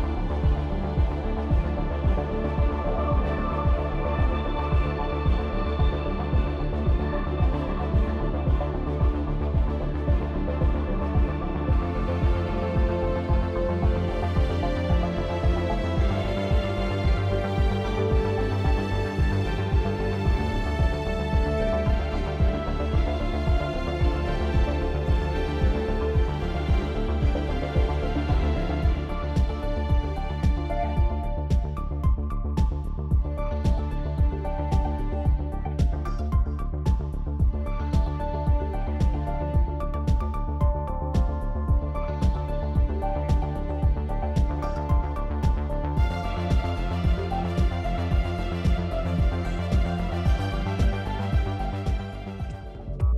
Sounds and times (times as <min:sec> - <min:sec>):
Music: 0:00.0 - 0:53.1.